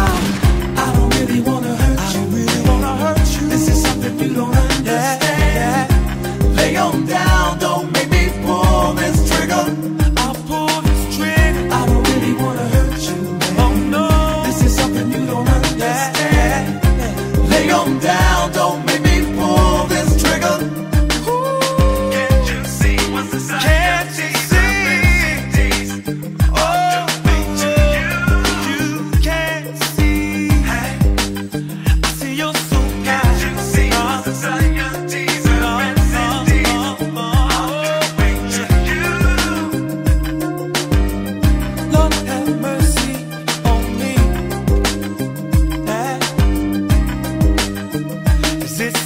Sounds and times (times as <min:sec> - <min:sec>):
Reggae: 0:00.0 - 0:49.0.